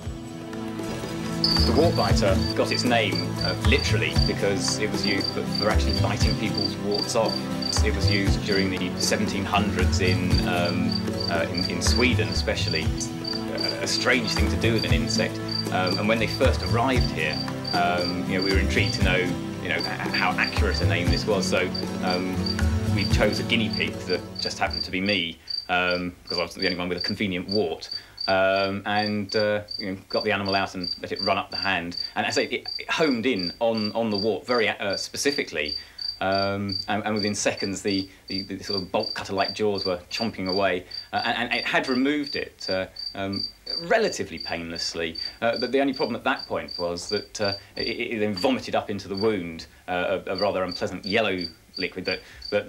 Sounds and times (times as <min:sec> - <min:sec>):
Cricket: 0:01.0 - 0:09.7, 0:10.3 - 0:16.2, 0:17.0 - 0:49.4, 0:50.2 - 0:52.6.